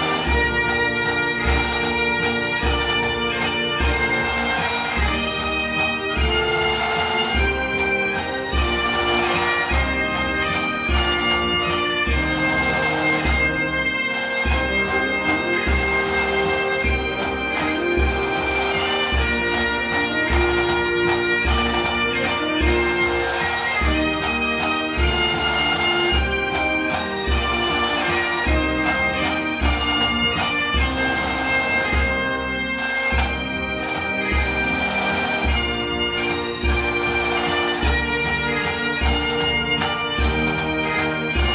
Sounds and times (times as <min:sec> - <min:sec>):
Bagpipes: 0:00.0 - 0:41.5.